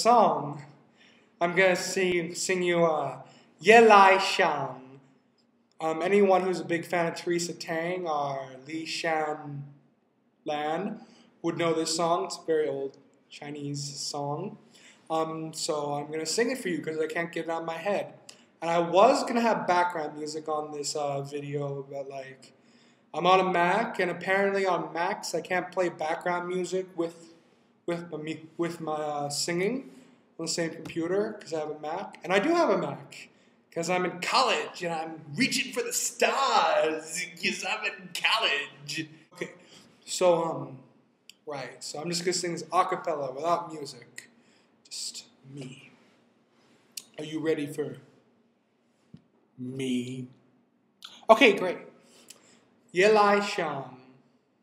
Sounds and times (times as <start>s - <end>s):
Speech: 0.0s - 0.7s, 1.4s - 5.0s, 5.8s - 9.6s, 10.5s - 22.5s, 23.2s - 27.3s, 27.9s - 44.2s, 44.9s - 45.9s, 47.0s - 48.0s, 49.6s - 50.3s, 51.1s - 51.9s, 53.0s - 54.1s.